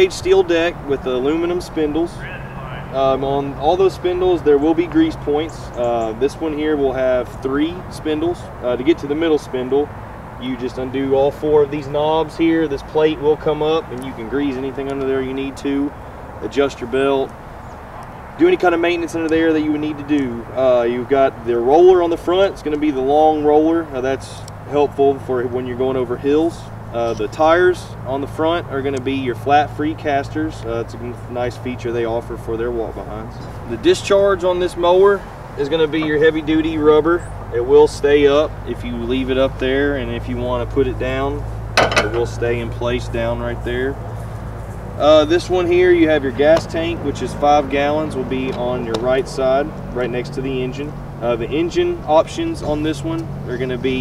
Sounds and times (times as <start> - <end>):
Speech: 0.0 - 17.3, 18.4 - 41.4, 42.0 - 44.0, 45.0 - 54.0.